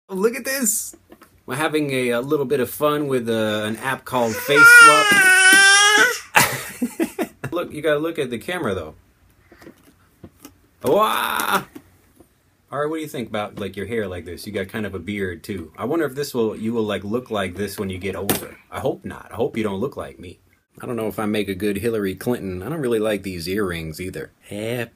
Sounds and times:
Babbling: 4.2 - 6.3.

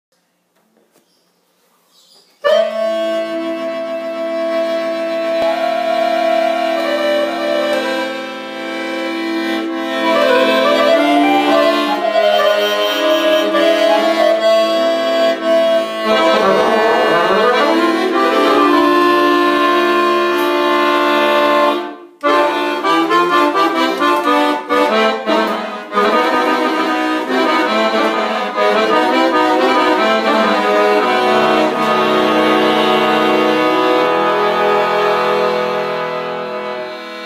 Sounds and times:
Accordion: 2.4 - 37.2.

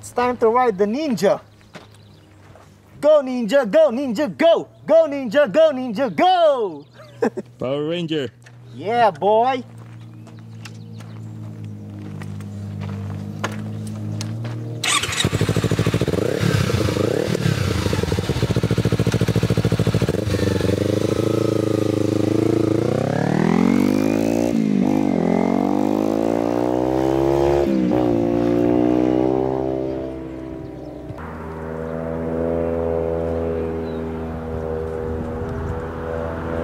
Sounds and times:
Speech: 0.0 - 1.5, 3.0 - 6.8, 7.6 - 9.7
Motorcycle: 9.7 - 36.6.

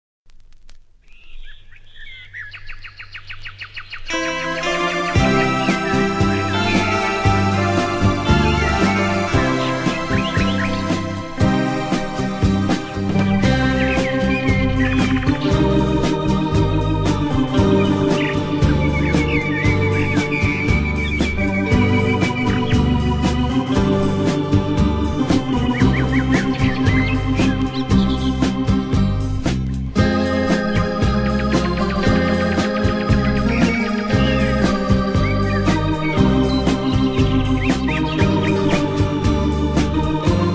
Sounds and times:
Bird: 1.0 - 4.2, 5.1 - 24.4, 25.2 - 29.1, 30.0 - 39.3
Music: 4.1 - 40.5.

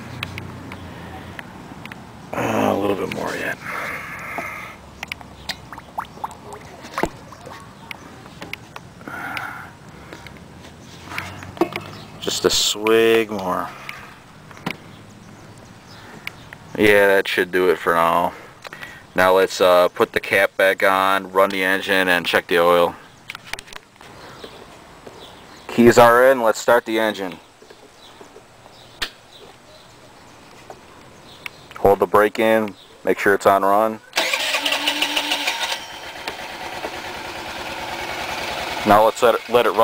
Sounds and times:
Speech: 2.4 - 3.6, 12.2 - 13.7, 16.8 - 18.4, 19.2 - 23.0, 25.7 - 27.4, 31.8 - 34.0, 38.8 - 39.8
Motorcycle: 34.2 - 39.8.

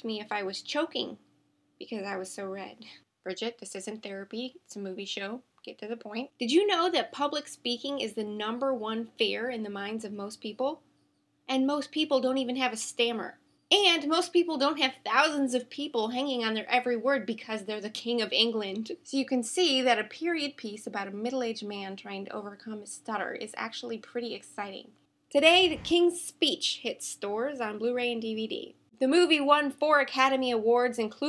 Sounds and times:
Female speech, woman speaking: 0.0 - 1.2, 1.8 - 10.8, 11.5 - 31.2.

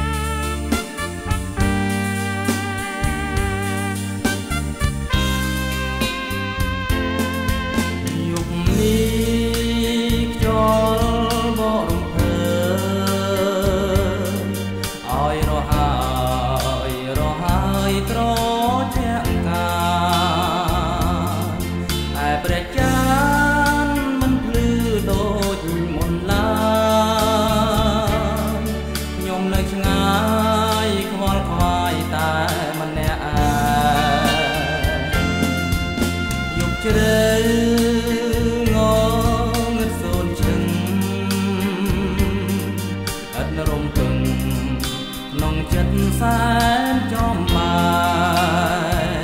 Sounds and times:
Soul music: 0.0 - 49.2
Wedding music: 0.0 - 49.2.

